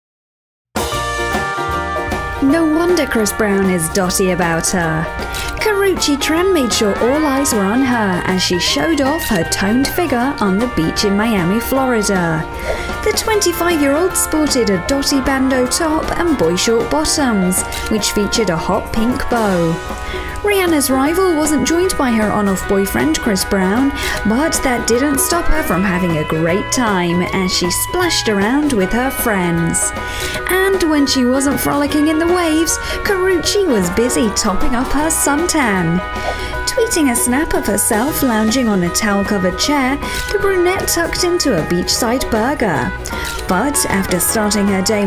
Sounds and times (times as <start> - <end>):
Music: 0.8 - 45.0
Speech: 2.4 - 19.8, 20.4 - 36.0, 36.7 - 45.0.